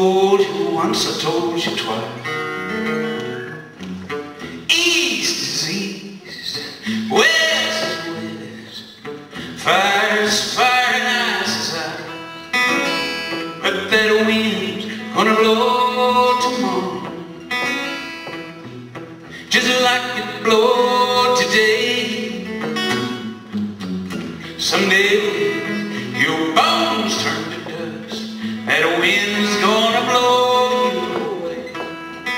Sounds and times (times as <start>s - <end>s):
Music: 0.0s - 32.3s.